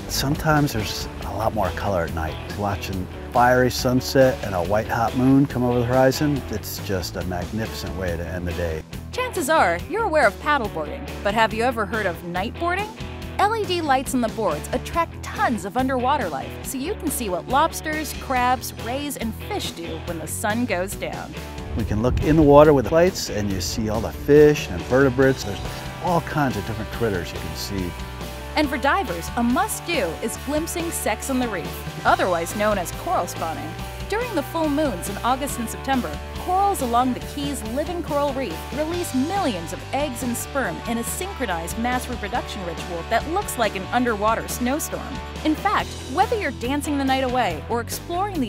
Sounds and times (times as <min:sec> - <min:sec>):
Music: 0:00.0 - 0:48.4
Speech: 0:00.1 - 0:28.0, 0:28.6 - 0:48.4.